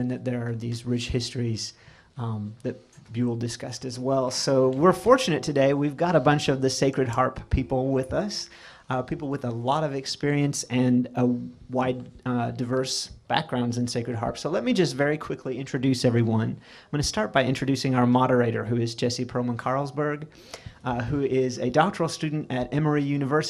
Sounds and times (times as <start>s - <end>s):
Speech: 0.0s - 23.4s.